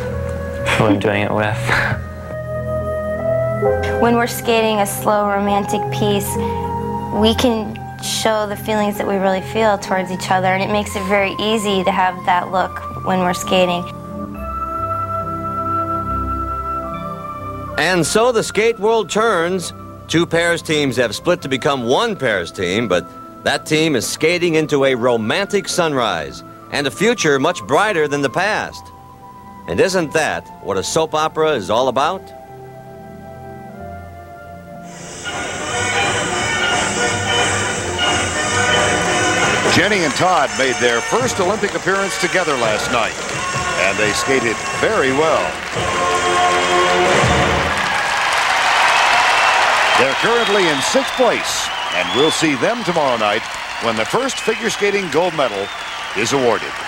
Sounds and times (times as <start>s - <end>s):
Music: 0.0s - 56.8s
Speech: 0.7s - 1.7s, 39.7s - 43.2s, 50.0s - 56.8s.